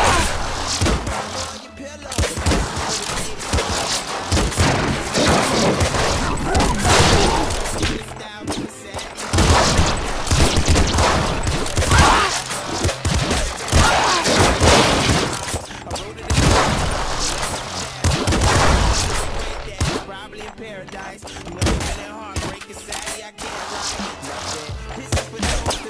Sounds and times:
Gunshot, gunfire: 0:00.0 - 0:20.2, 0:21.6 - 0:25.8.

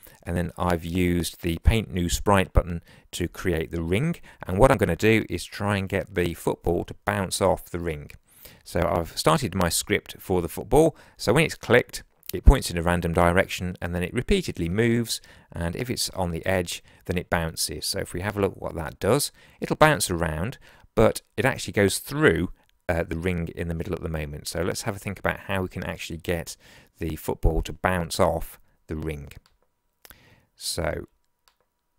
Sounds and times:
Speech: 0:00.2 - 0:29.4, 0:30.6 - 0:31.2.

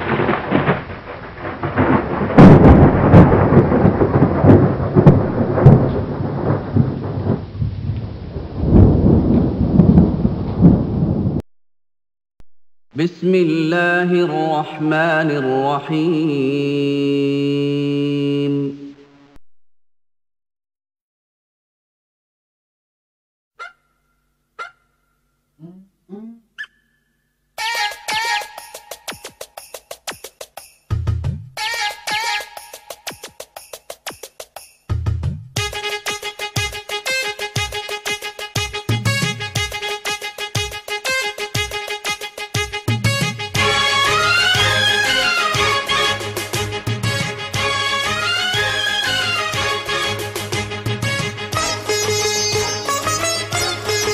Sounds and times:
Music: 0:27.6 - 0:54.1.

